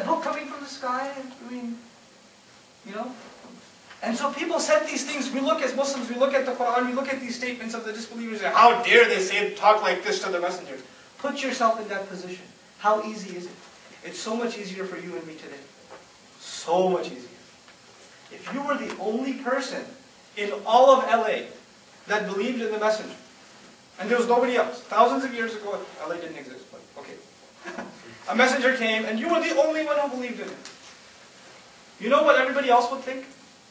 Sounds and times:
Male speech, man speaking: 0.0 - 1.9, 2.8 - 3.4, 4.0 - 15.7, 16.4 - 17.4, 18.3 - 23.2, 24.0 - 27.3, 28.3 - 30.7, 32.0 - 33.4
Narration, monologue: 0.0 - 33.7.

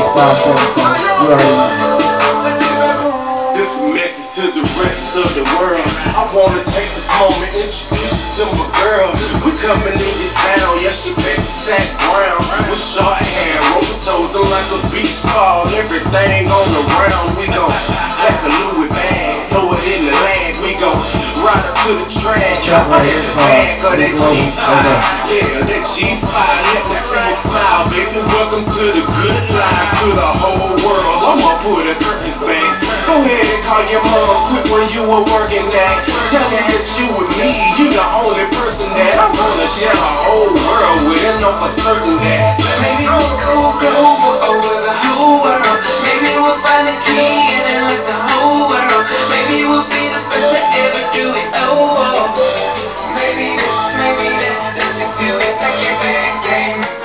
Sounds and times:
Music: 0.0 - 57.0.

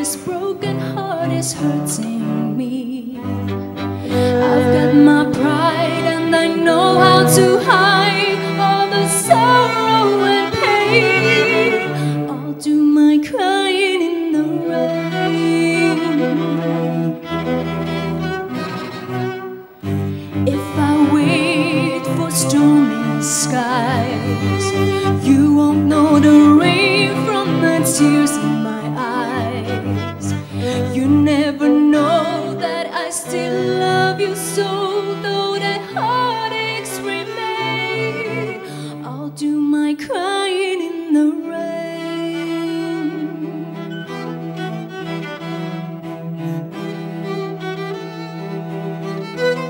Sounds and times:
Music: 0.0 - 49.7.

